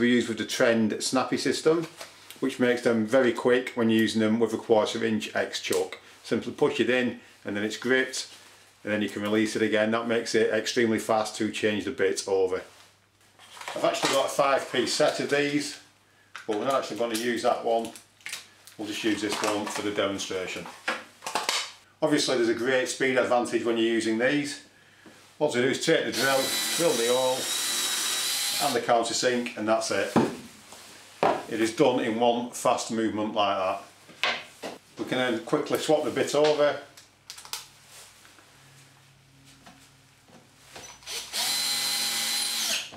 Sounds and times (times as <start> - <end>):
Speech: 0.0 - 12.7, 13.7 - 18.0, 18.8 - 20.8, 22.0 - 24.7, 25.4 - 27.5, 28.6 - 30.3, 31.4 - 33.9, 35.0 - 37.0.